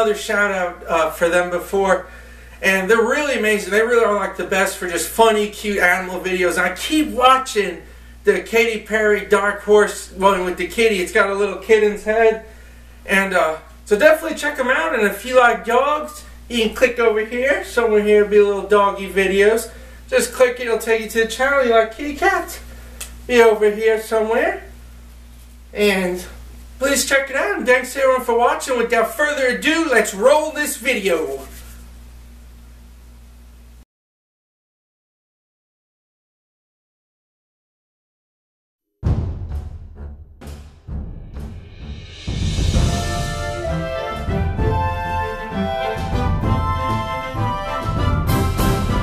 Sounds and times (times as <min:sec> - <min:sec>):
Speech: 0:00.0 - 0:12.5, 0:13.1 - 0:22.7, 0:23.3 - 0:24.7, 0:25.7 - 0:31.6.